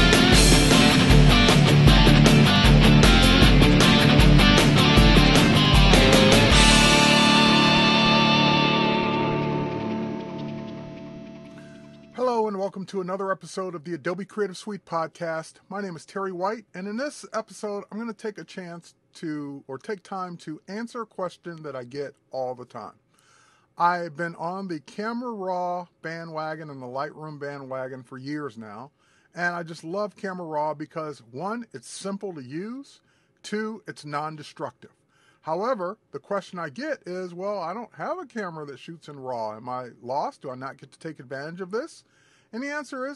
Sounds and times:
Speech: 12.2s - 23.0s, 23.8s - 43.1s.

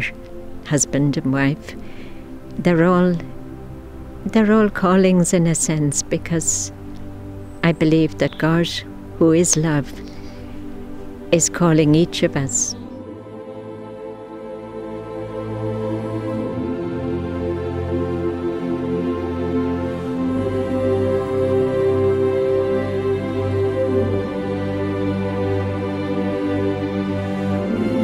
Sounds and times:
New-age music: 0.0s - 28.0s
Female speech, woman speaking: 0.7s - 1.8s, 2.6s - 3.3s, 4.3s - 6.7s, 7.6s - 10.0s, 11.3s - 12.8s.

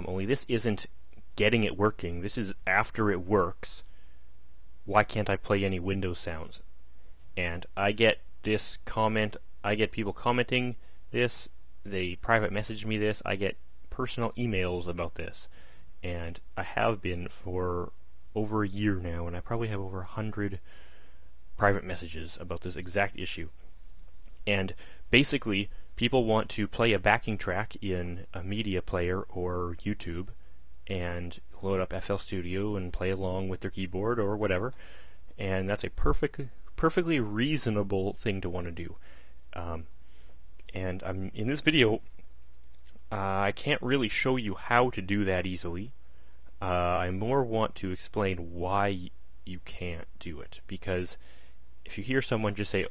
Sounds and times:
Speech: 0.0s - 3.9s, 4.9s - 6.6s, 7.4s - 20.7s, 21.6s - 23.6s, 24.4s - 34.8s, 35.4s - 39.0s, 39.6s - 39.9s, 40.7s - 42.0s, 43.1s - 46.0s, 46.6s - 51.2s, 51.9s - 52.9s.

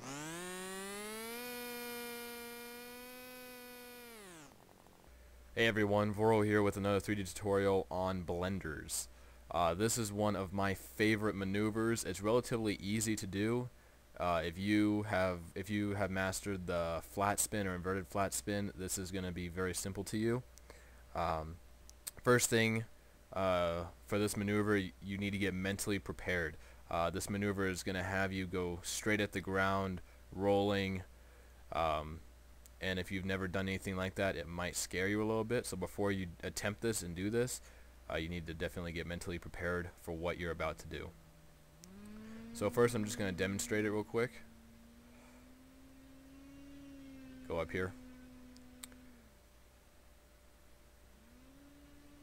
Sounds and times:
Speech: 5.6s - 20.5s, 21.1s - 31.1s, 31.7s - 32.2s, 32.8s - 41.2s, 42.6s - 44.4s, 47.4s - 48.0s.

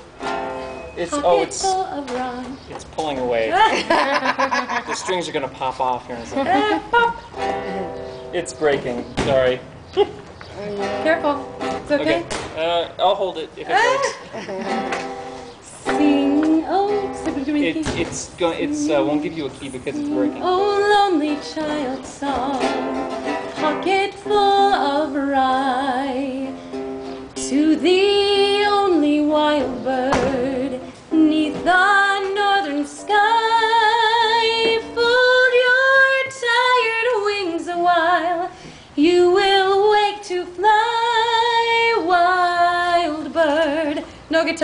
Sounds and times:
Music: 0.0s - 2.4s, 6.3s - 9.6s, 10.6s - 12.8s, 14.6s - 43.9s
Female singing: 1.1s - 2.6s, 15.8s - 23.0s, 23.6s - 26.6s, 27.4s - 44.6s.

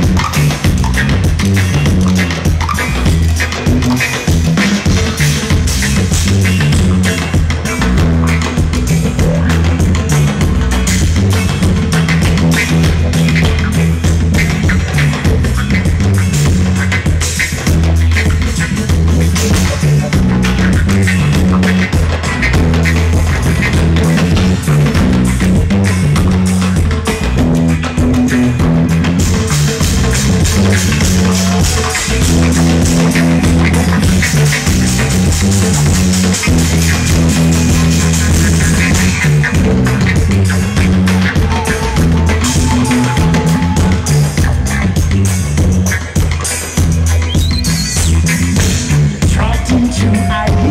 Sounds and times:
Crowd: 0.0s - 50.7s
Musical instrument: 0.0s - 50.7s.

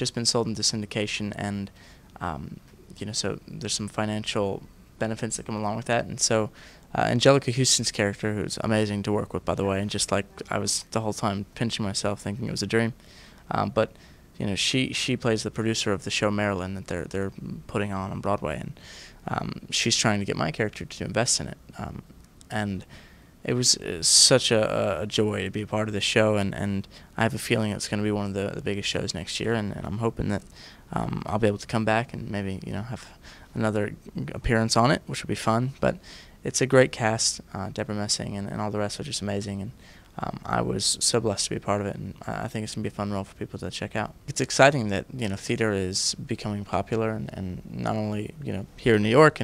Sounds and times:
Speech: 0.0s - 49.4s.

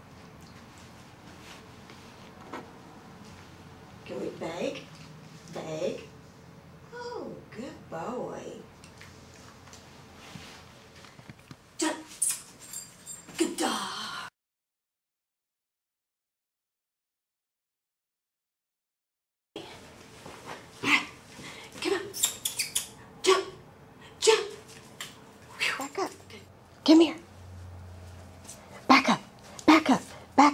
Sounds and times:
Speech: 4.1s - 4.9s, 5.5s - 6.1s, 6.9s - 8.7s, 11.8s - 12.2s, 13.4s - 14.3s, 21.8s - 22.2s, 23.2s - 23.6s, 24.2s - 24.6s, 25.6s - 27.3s, 28.9s - 30.5s.

